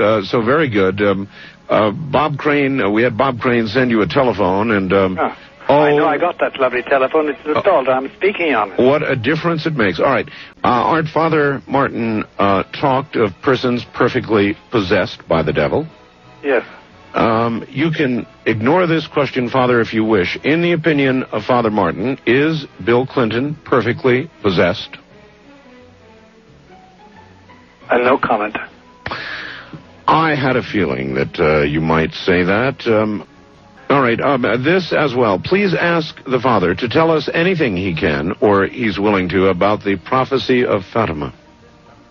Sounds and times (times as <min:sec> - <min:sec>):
Speech: 0:00.0 - 0:25.0, 0:27.9 - 0:28.7, 0:30.1 - 0:33.3, 0:33.9 - 0:41.4
Music: 0:00.0 - 0:42.1.